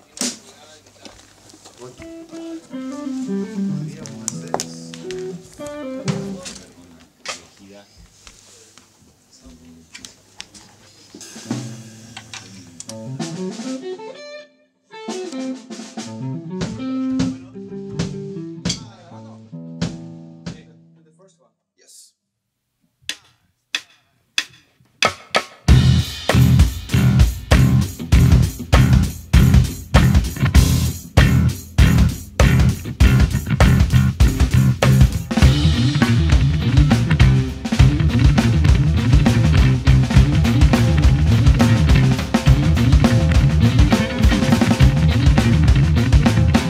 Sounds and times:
Speech: 0:00.0 - 0:02.7, 0:03.4 - 0:05.1, 0:06.1 - 0:11.3, 0:18.7 - 0:19.6, 0:20.4 - 0:22.2
Music: 0:01.9 - 0:06.8, 0:11.2 - 0:21.3, 0:24.4 - 0:46.6.

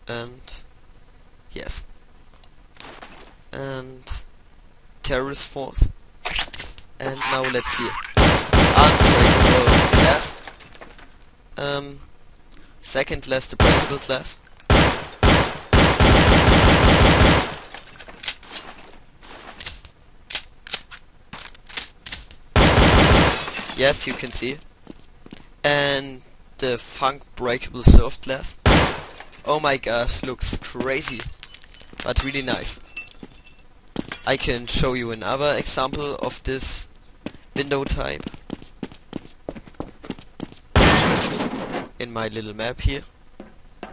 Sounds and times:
Speech: 0:00.0 - 0:00.7, 0:01.5 - 0:01.9, 0:03.5 - 0:04.3, 0:05.0 - 0:06.0, 0:06.6 - 0:08.2, 0:08.8 - 0:10.4, 0:11.6 - 0:12.1, 0:12.8 - 0:14.4, 0:23.8 - 0:24.6, 0:25.6 - 0:28.6, 0:29.5 - 0:31.3, 0:32.0 - 0:32.8, 0:34.3 - 0:36.9, 0:37.6 - 0:38.3, 0:42.0 - 0:43.1
Fusillade: 0:08.2 - 0:10.4, 0:14.7 - 0:17.7, 0:22.6 - 0:23.4, 0:28.6 - 0:29.1, 0:40.8 - 0:41.3.

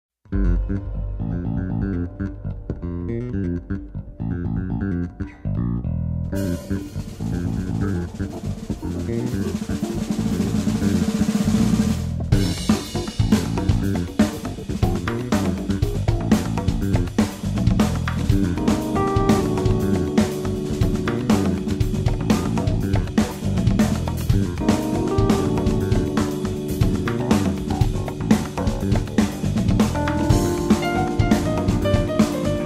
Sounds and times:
Bass drum: 0:06.3 - 0:32.6
Drum roll: 0:06.4 - 0:32.6.

